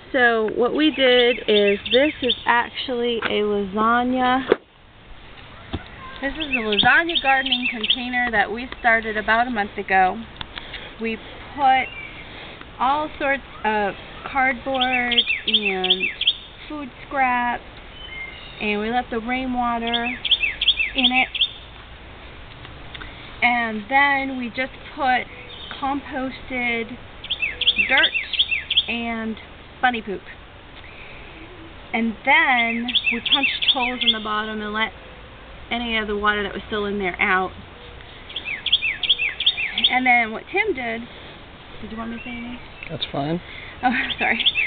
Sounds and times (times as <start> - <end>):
Outside, rural or natural: 0.0 - 44.6
Speech: 0.2 - 4.5, 6.0 - 10.2, 18.6 - 20.2, 23.4 - 25.2, 28.9 - 30.3, 41.8 - 44.4.